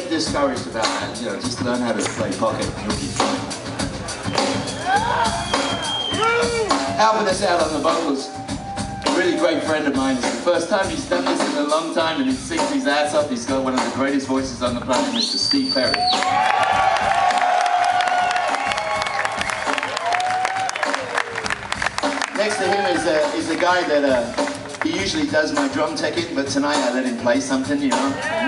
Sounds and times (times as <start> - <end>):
Speech: 0.0 - 3.2, 6.4 - 8.3, 9.1 - 16.0, 22.4 - 28.4
Drum: 0.0 - 15.1, 15.8 - 28.4
Drum kit: 0.0 - 28.4.